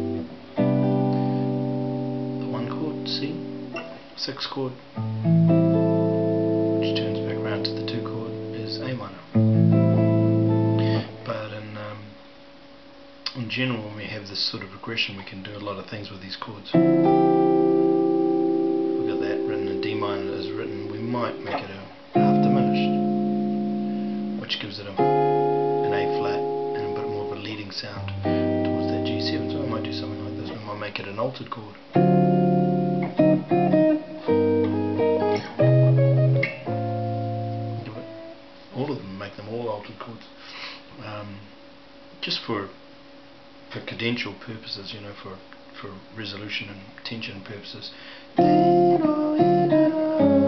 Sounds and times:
Speech: 0:02.4 - 0:03.5, 0:04.2 - 0:04.8, 0:06.8 - 0:09.3, 0:10.9 - 0:12.2, 0:13.3 - 0:16.8, 0:19.0 - 0:23.0, 0:24.4 - 0:25.2, 0:25.8 - 0:31.8, 0:38.7 - 0:40.4, 0:41.0 - 0:41.5, 0:42.2 - 0:42.8, 0:43.7 - 0:48.7.

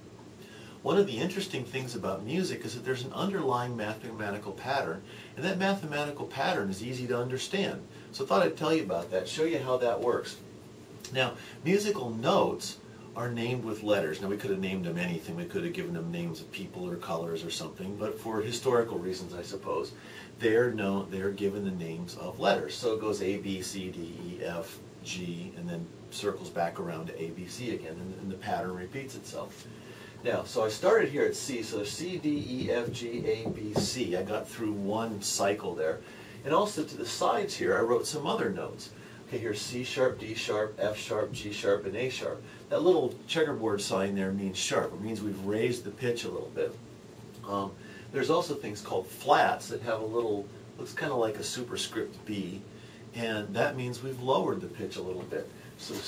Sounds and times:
Speech: 0:00.8 - 0:46.8, 0:47.4 - 0:56.0.

